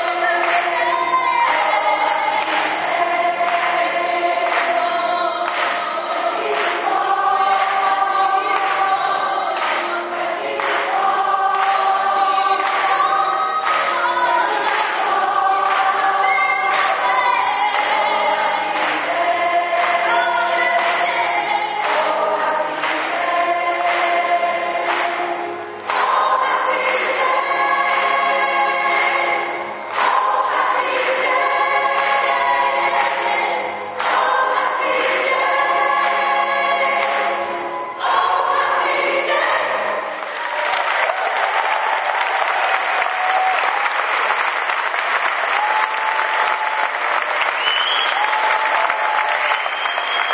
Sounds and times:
Applause: 0.0 - 21.2, 21.8 - 27.3, 28.9 - 31.3, 34.0 - 35.3, 37.0 - 37.4, 40.2 - 50.3
Choir: 0.0 - 50.3
Inside, large room or hall: 0.0 - 50.3.

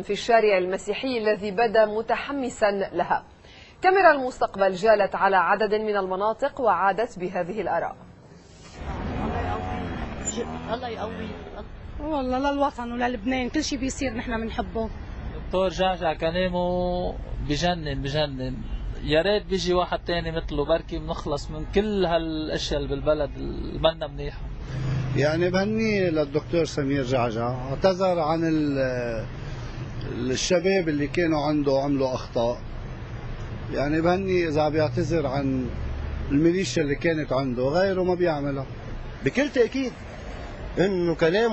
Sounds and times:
Male speech, man speaking: 15.5 - 24.5, 25.2 - 29.3, 30.0 - 32.6, 33.7 - 40.0, 40.8 - 41.5.

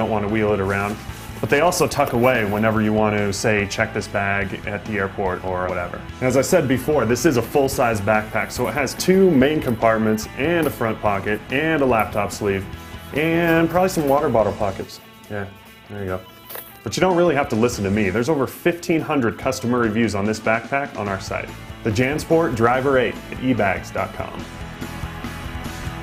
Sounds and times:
Speech: 0.0 - 16.3, 16.9 - 24.4
Music: 0.0 - 26.0.

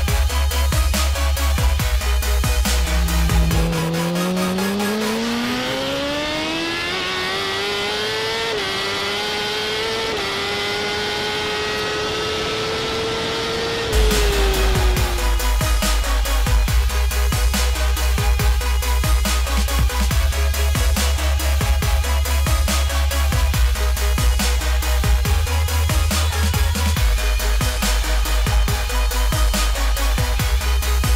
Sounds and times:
Music: 0.0 - 31.1
Vehicle: 0.0 - 31.1
Accelerating, revving, vroom: 2.4 - 28.8.

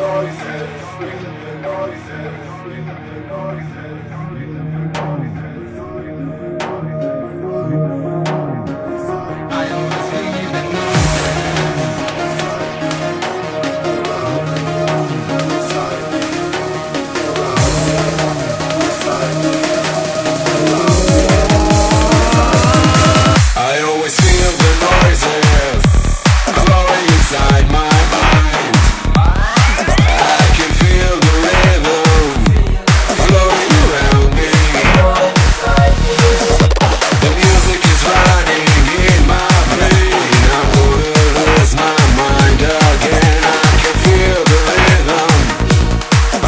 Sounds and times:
Trance music: 0.0 - 46.4.

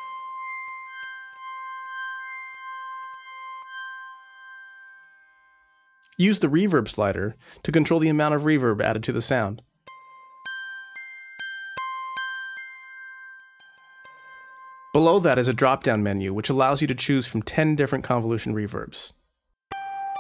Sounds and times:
Music: 0.0 - 8.6, 9.6 - 16.2, 19.7 - 20.2
Speech: 6.1 - 9.6, 15.0 - 19.2.

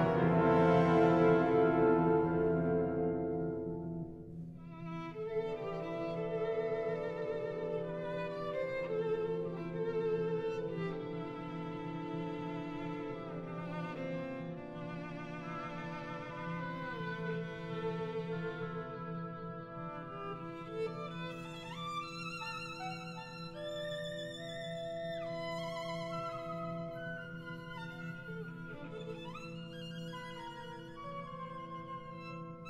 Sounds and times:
Violin, fiddle: 4.6 - 32.6.

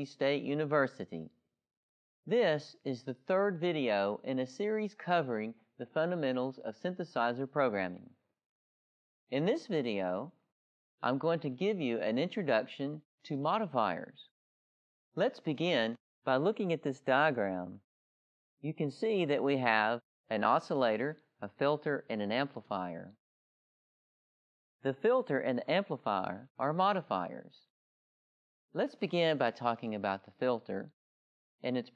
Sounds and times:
Speech: 0.0 - 1.4, 2.3 - 8.1, 9.3 - 10.3, 11.0 - 14.3, 15.2 - 17.8, 18.6 - 23.2, 24.8 - 27.7, 28.8 - 31.0, 31.6 - 31.9.

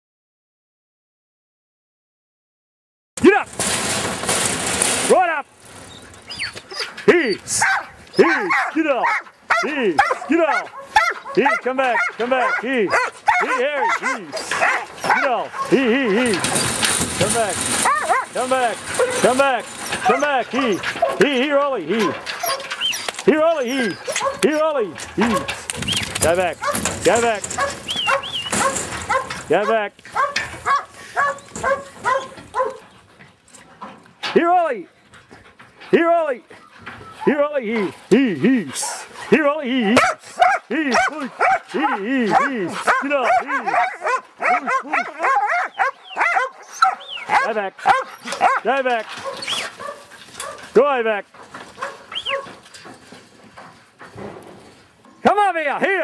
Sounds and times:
Speech: 3.2 - 3.5, 5.1 - 5.5, 7.1 - 10.7, 11.4 - 16.5, 17.2 - 17.6, 18.3 - 22.2, 23.3 - 25.6, 26.2 - 27.5, 29.5 - 30.0, 34.3 - 34.9, 35.9 - 36.5, 37.2 - 45.3, 47.3 - 49.1, 50.8 - 51.3, 55.2 - 56.0
Bow-wow: 7.6 - 15.8, 17.8 - 18.3, 24.1 - 24.5, 27.6 - 32.8, 40.0 - 50.6, 51.8 - 52.5.

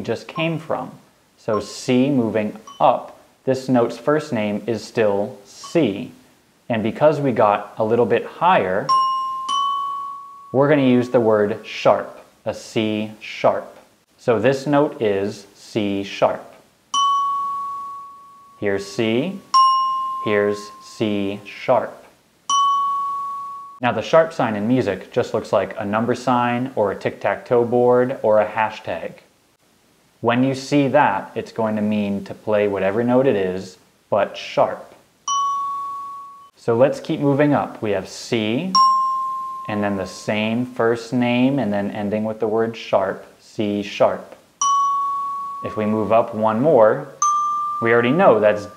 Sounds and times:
Glockenspiel: 1.5 - 1.9, 2.6 - 3.0, 8.9 - 11.2, 17.0 - 21.2, 22.5 - 23.8, 35.3 - 36.6, 38.8 - 40.7, 44.6 - 46.4, 47.1 - 48.7
Marimba, xylophone: 2.6 - 2.8, 8.9 - 10.6, 17.0 - 18.6, 19.5 - 20.9, 22.5 - 23.8, 35.3 - 36.5, 38.8 - 40.3, 44.6 - 46.0, 47.2 - 48.7.

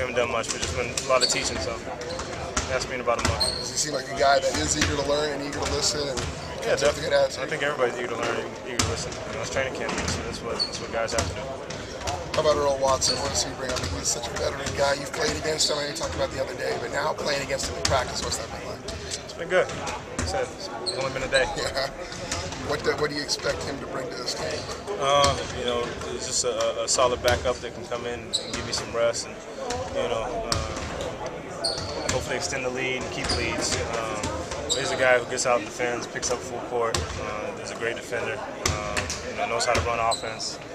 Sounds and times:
Speech: 0.0 - 31.4, 32.0 - 40.6.

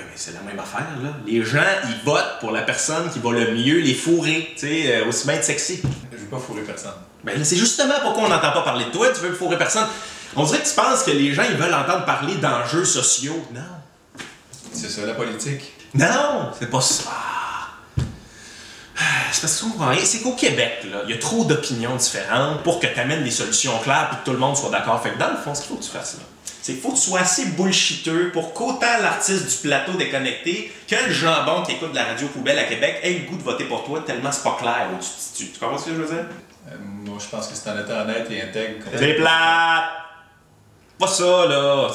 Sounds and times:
Speech: 0.0 - 13.9, 14.6 - 17.8, 19.0 - 40.2, 41.0 - 41.9.

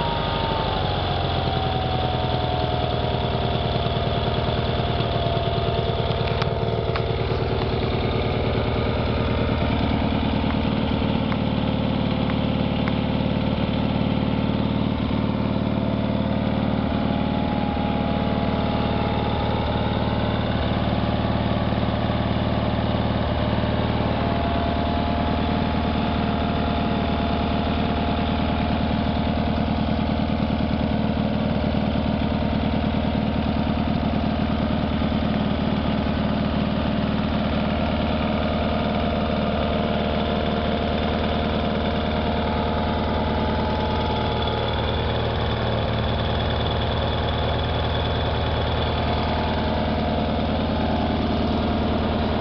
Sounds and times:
Idling: 0.0 - 52.4
Medium engine (mid frequency): 0.0 - 52.4.

